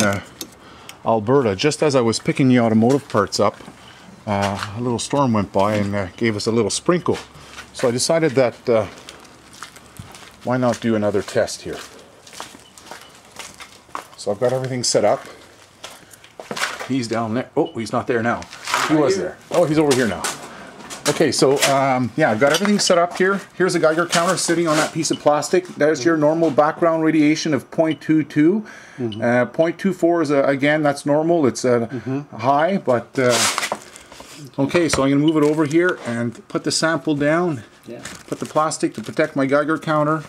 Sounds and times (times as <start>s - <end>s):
Speech: 0.0s - 0.3s, 1.1s - 3.6s, 4.3s - 9.0s, 10.4s - 11.9s, 14.2s - 15.4s, 16.9s - 20.4s, 21.0s - 33.5s, 34.5s - 40.2s.